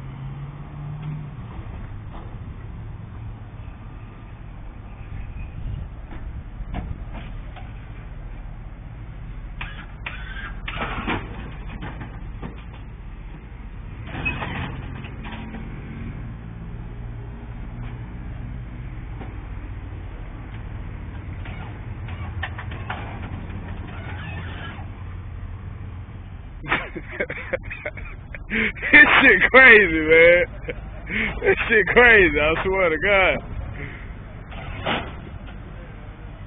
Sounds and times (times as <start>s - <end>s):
Vehicle: 0.0s - 36.4s
Speech: 29.0s - 30.5s, 31.4s - 34.0s.